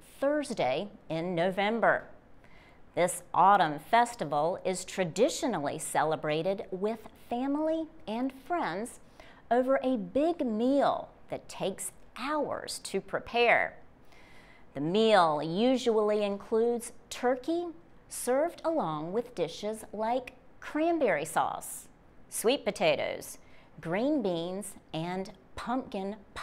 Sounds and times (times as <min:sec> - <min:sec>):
Speech: 0:00.1 - 0:02.2, 0:03.0 - 0:13.8, 0:14.8 - 0:26.4.